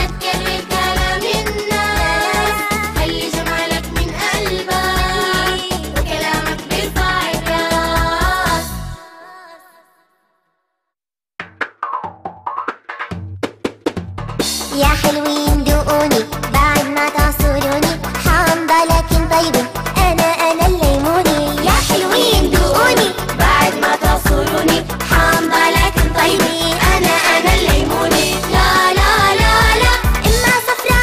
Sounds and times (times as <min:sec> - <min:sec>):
Music for children: 0:00.0 - 0:08.8, 0:14.5 - 0:31.0
Singing: 0:00.0 - 0:10.0, 0:14.8 - 0:31.0
Drum roll: 0:11.4 - 0:31.0.